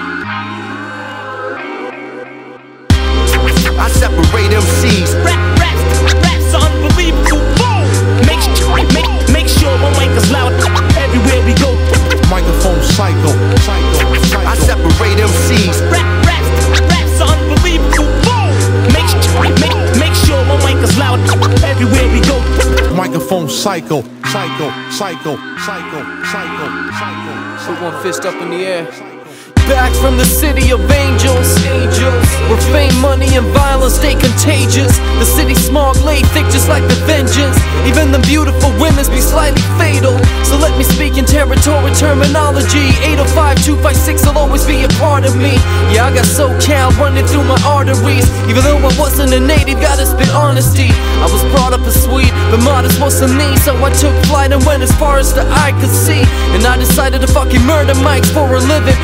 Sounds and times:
Music: 0.0s - 59.0s
Speech: 27.6s - 29.0s.

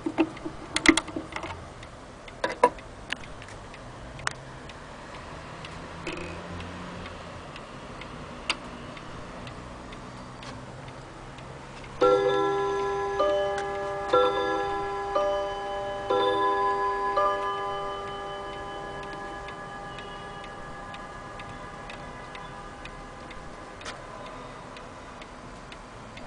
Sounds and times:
Tick-tock: 0.0s - 26.2s
Tick: 2.7s - 5.8s, 6.6s - 12.0s, 19.0s - 20.1s.

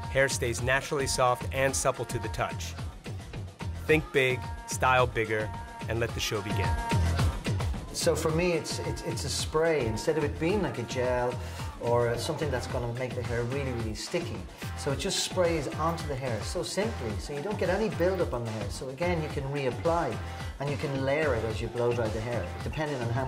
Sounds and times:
Music: 0.0s - 23.2s
Speech: 0.1s - 2.7s, 3.9s - 6.8s, 8.0s - 23.2s.

